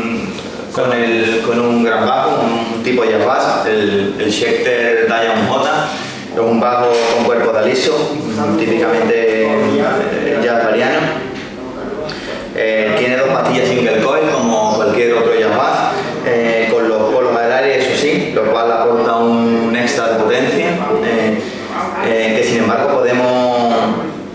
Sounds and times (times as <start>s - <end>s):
Speech: 0.0s - 24.2s.